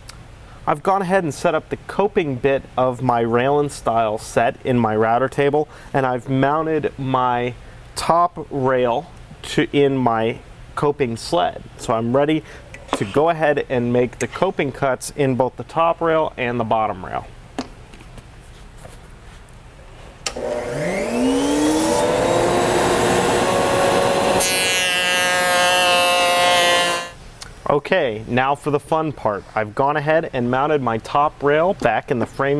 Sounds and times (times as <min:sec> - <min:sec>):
Power tool: 0:20.3 - 0:27.2.